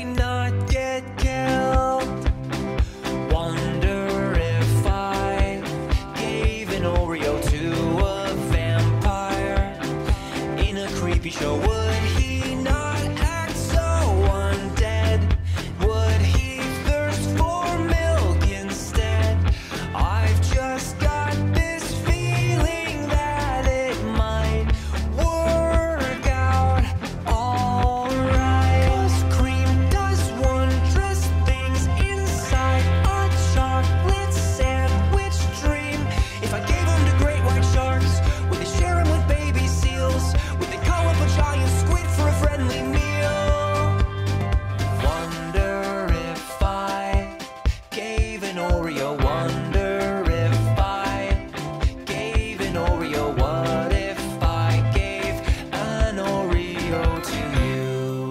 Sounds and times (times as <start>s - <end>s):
Music: 0.0s - 58.3s.